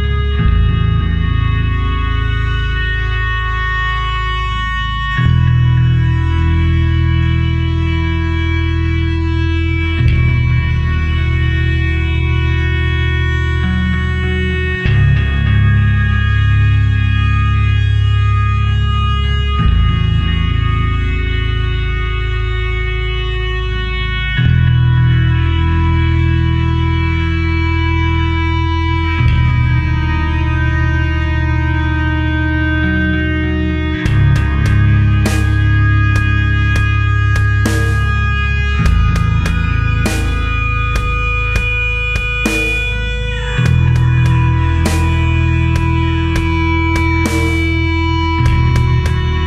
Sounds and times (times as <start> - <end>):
Music: 0.0 - 49.4.